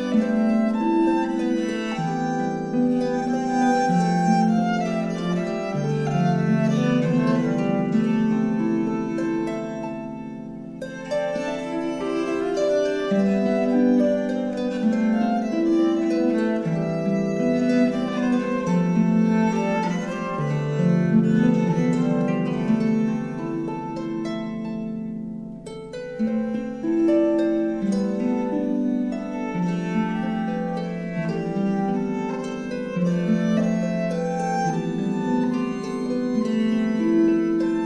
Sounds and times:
Harp: 0.0s - 37.8s
Pizzicato: 0.0s - 37.8s.

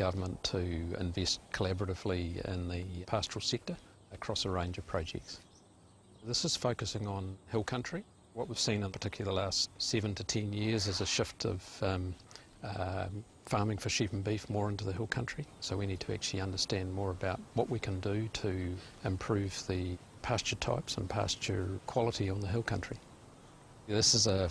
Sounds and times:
Speech: 0.0s - 5.4s, 6.2s - 23.0s, 23.9s - 24.5s.

